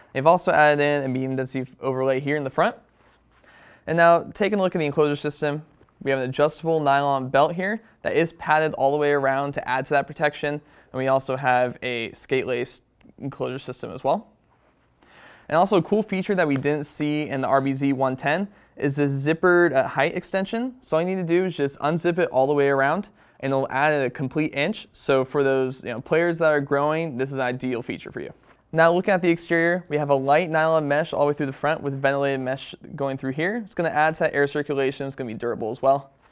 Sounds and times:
Speech: 0.1 - 2.8, 3.9 - 14.3, 15.5 - 36.1.

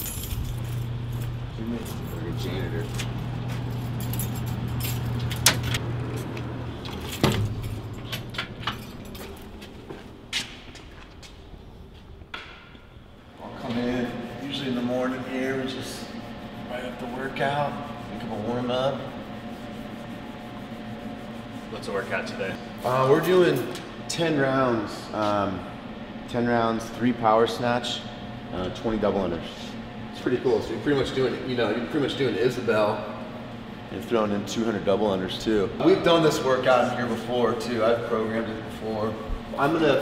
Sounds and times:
Speech: 1.5 - 2.9, 13.4 - 19.1, 21.7 - 25.7, 26.3 - 33.1, 33.9 - 40.0.

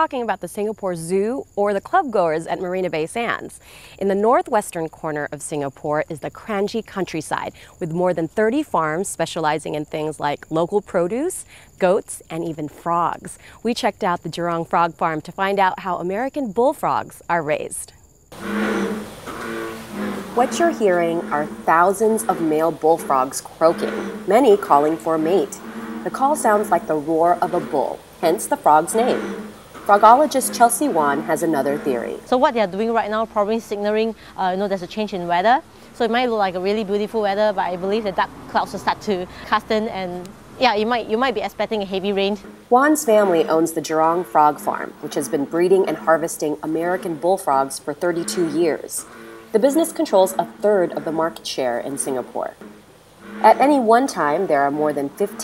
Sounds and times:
Speech: 0.0 - 18.0, 20.4 - 29.3, 29.9 - 49.0, 49.6 - 52.6, 53.4 - 55.4.

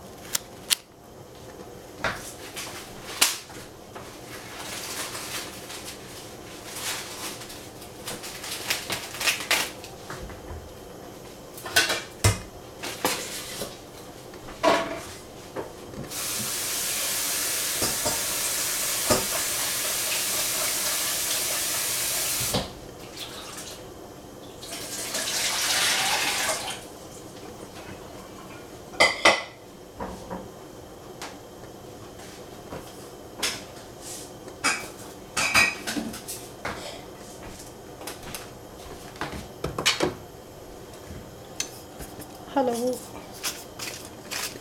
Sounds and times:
Frying (food): 2.4 - 10.2, 11.5 - 30.4.

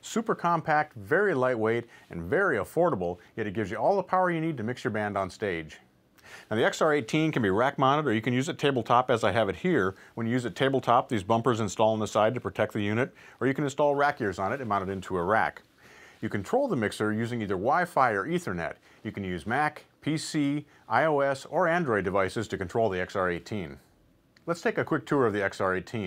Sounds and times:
Speech: 0.0 - 5.9, 6.5 - 26.0.

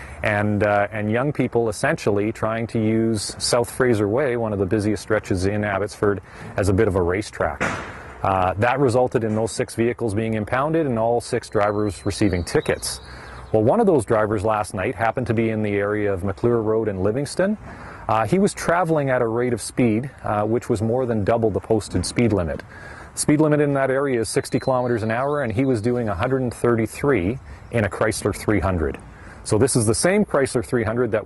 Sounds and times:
Speech: 0.2 - 31.2.

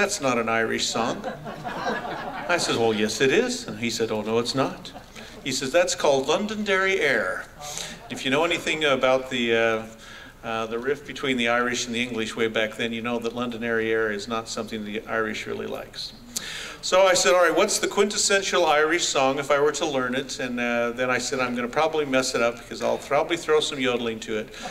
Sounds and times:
Speech: 0.0 - 1.4, 2.5 - 16.2, 16.8 - 24.6.

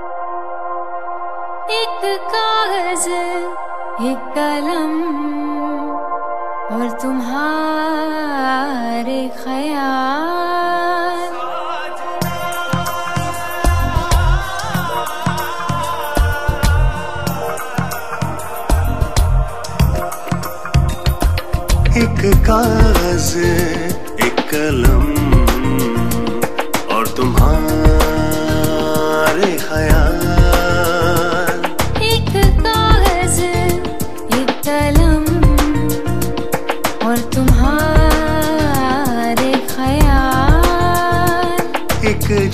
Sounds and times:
Music: 0.0 - 42.5
Singing: 6.7 - 21.2, 21.9 - 42.5.

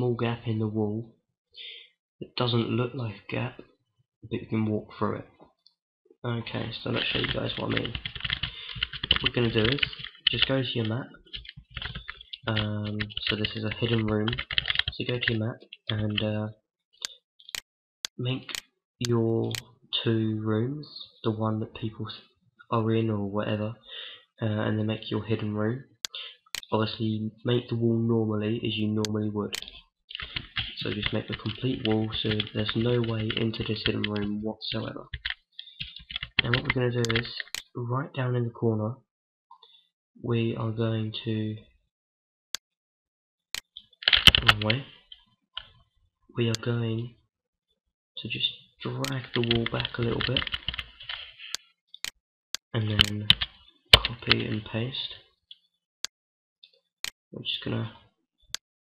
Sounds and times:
Speech: 0.0 - 1.2, 2.2 - 5.4, 6.2 - 8.1, 9.1 - 11.3, 12.4 - 16.6, 18.2 - 23.8, 24.4 - 29.8, 30.6 - 35.2, 36.4 - 39.1, 40.2 - 41.8, 44.4 - 45.0, 46.4 - 47.2, 48.2 - 50.5, 52.7 - 53.4, 54.0 - 55.3, 57.3 - 58.1
Computer keyboard: 6.9 - 15.0, 29.5 - 34.3, 35.1 - 37.6, 44.0 - 44.8, 49.0 - 51.3, 53.0 - 54.6.

